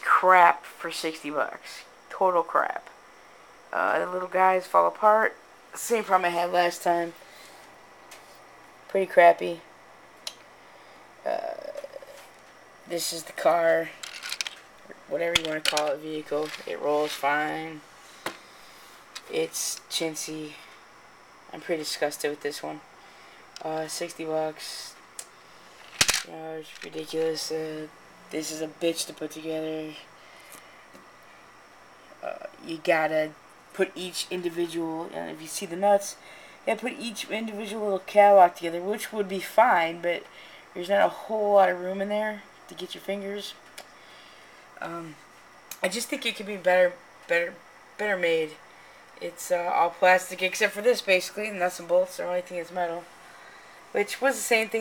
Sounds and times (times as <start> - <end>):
Speech: 0.0 - 3.0, 3.7 - 7.2, 8.9 - 9.7, 11.2 - 12.1, 12.9 - 14.0, 14.9 - 17.8, 19.2 - 20.7, 21.5 - 22.8, 23.6 - 25.0, 26.2 - 30.1, 32.2 - 43.6, 44.8 - 45.2, 45.8 - 48.6, 49.2 - 53.1, 53.9 - 54.8.